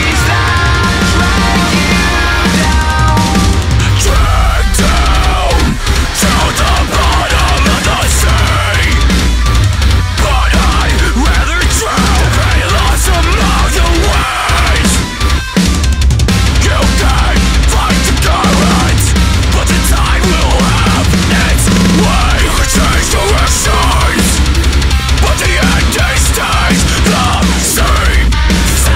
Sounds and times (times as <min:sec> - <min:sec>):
Music: 0:00.0 - 0:28.9.